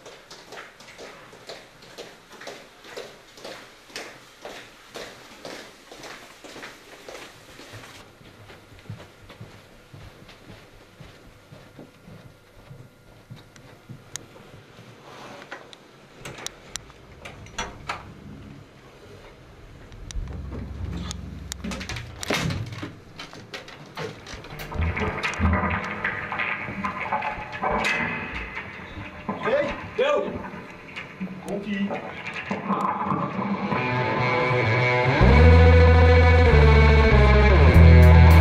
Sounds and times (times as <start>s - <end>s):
Walk, footsteps: 0.0s - 15.7s.